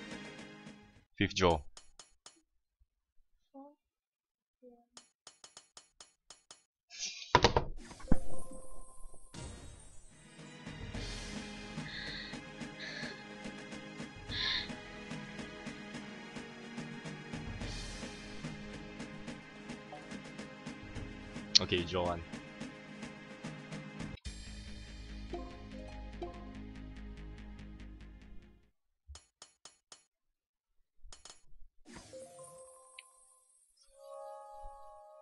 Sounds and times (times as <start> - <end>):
Music: 0.0 - 1.1, 8.4 - 28.7, 32.0 - 35.2.